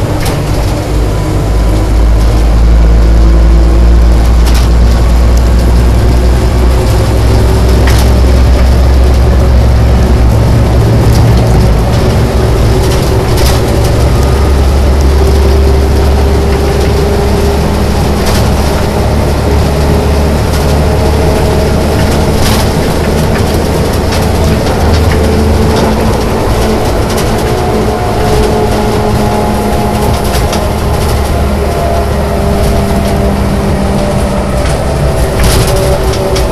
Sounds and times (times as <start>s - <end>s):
Truck: 0.0s - 36.5s.